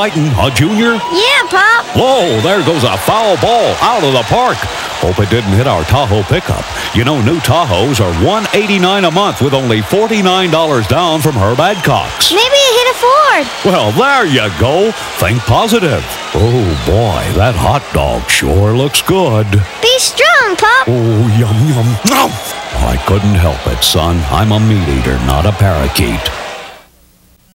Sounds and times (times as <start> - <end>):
Speech: 0.0 - 26.4.